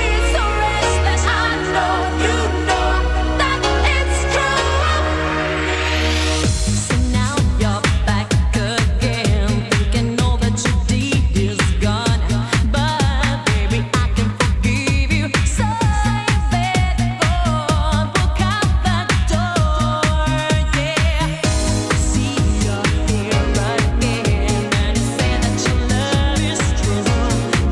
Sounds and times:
Dance music: 0:00.0 - 0:27.7.

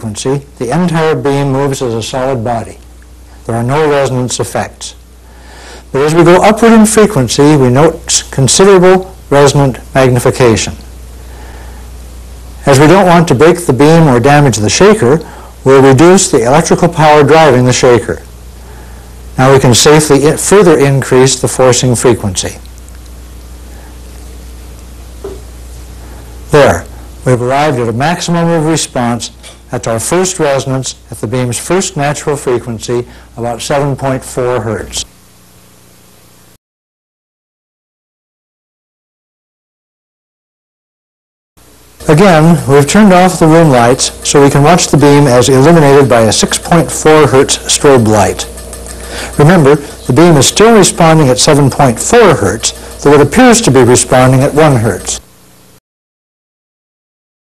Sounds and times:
Speech: 0:00.0 - 0:02.8, 0:03.4 - 0:05.0, 0:05.9 - 0:10.8, 0:12.6 - 0:18.3, 0:19.4 - 0:22.7, 0:26.5 - 0:35.1, 0:42.0 - 0:48.5, 0:49.4 - 0:55.3.

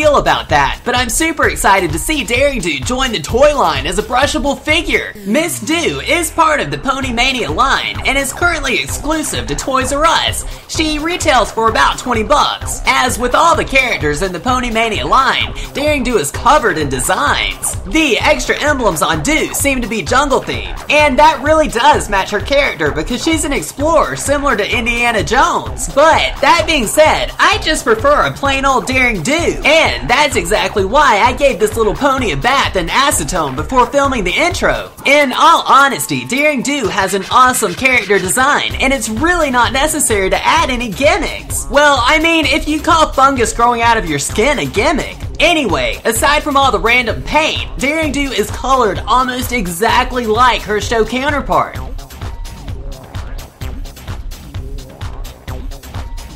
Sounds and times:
Speech: 0:00.0 - 0:51.8
Music: 0:00.0 - 0:56.3.

